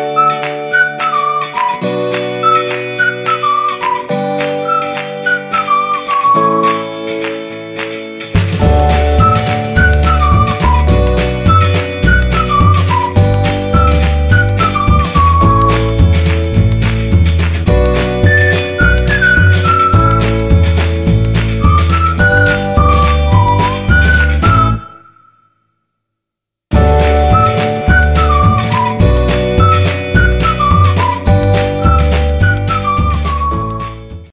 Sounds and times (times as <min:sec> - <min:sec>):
Music: 0:00.0 - 0:25.2, 0:26.7 - 0:34.3.